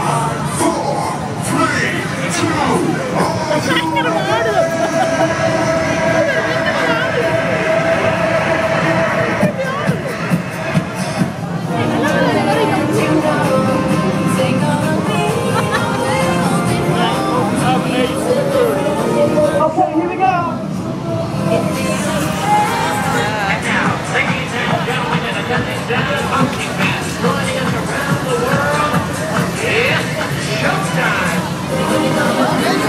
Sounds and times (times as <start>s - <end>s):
Music: 0.0s - 32.8s.